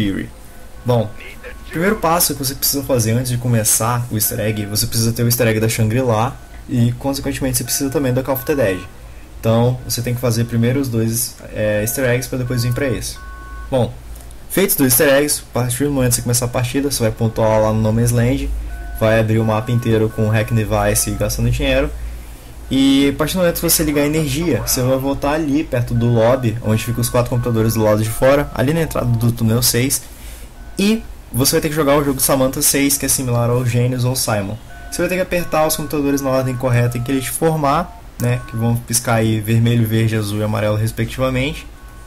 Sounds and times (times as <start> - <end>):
Speech: 0.0 - 0.3, 0.9 - 21.9, 22.7 - 30.0, 30.8 - 41.7.